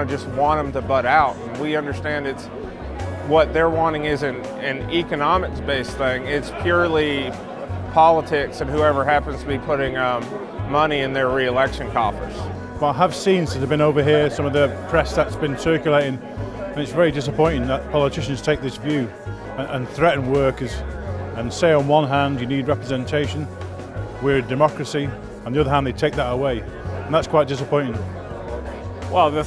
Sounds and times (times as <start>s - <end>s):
Speech: 0.0s - 2.5s, 3.2s - 16.2s, 16.8s - 20.8s, 21.4s - 23.5s, 24.2s - 28.0s, 29.1s - 29.4s
Music: 0.0s - 29.4s.